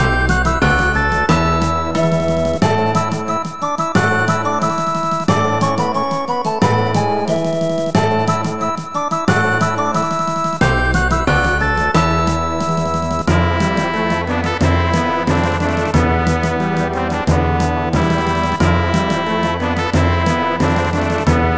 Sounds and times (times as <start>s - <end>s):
Blues: 0.0s - 21.5s.